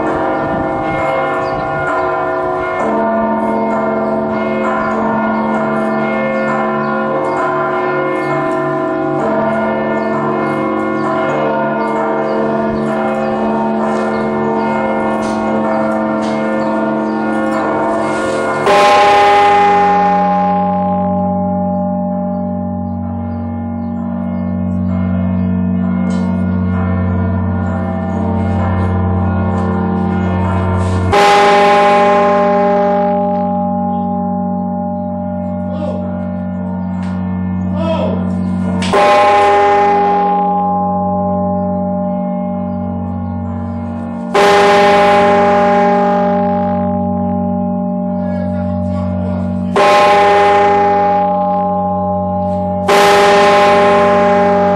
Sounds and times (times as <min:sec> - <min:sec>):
Church bell: 0:00.0 - 0:54.7.